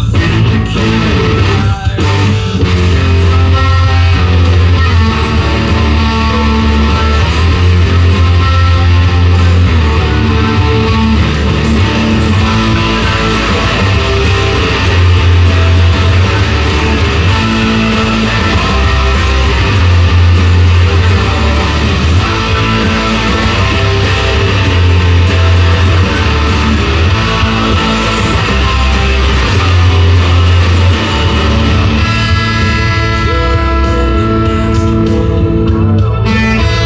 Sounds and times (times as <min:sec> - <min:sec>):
Guitar: 0:00.0 - 0:36.8.